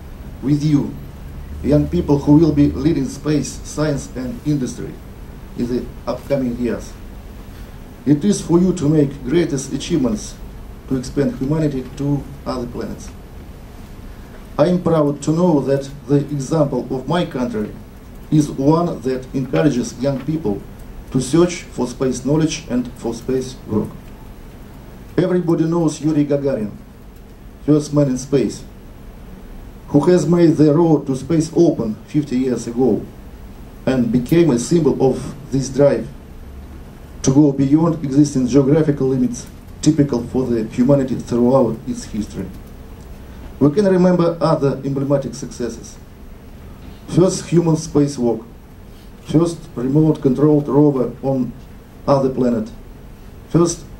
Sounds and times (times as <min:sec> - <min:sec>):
Narration, monologue: 0:00.0 - 0:53.9
Male speech, man speaking: 0:00.4 - 0:01.0, 0:01.6 - 0:05.0, 0:05.6 - 0:07.0, 0:08.1 - 0:13.2, 0:14.6 - 0:24.0, 0:25.2 - 0:26.8, 0:27.6 - 0:28.7, 0:29.9 - 0:33.1, 0:33.9 - 0:36.2, 0:37.2 - 0:42.6, 0:43.6 - 0:46.0, 0:47.1 - 0:48.5, 0:49.3 - 0:52.8, 0:53.5 - 0:53.9.